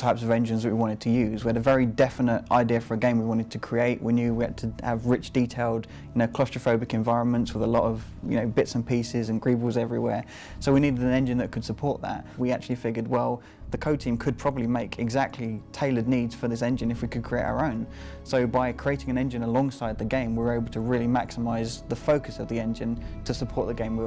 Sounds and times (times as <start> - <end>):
Music: 0.0 - 24.0
Speech: 0.0 - 24.0.